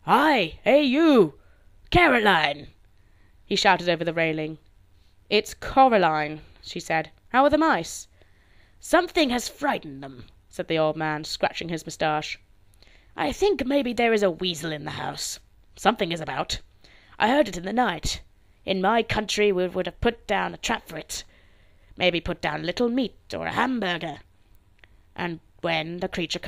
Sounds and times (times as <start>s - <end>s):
Speech: 0.0s - 2.8s, 3.5s - 4.6s, 5.3s - 8.1s, 8.8s - 12.4s, 13.2s - 21.3s, 22.0s - 24.3s, 25.2s - 26.4s.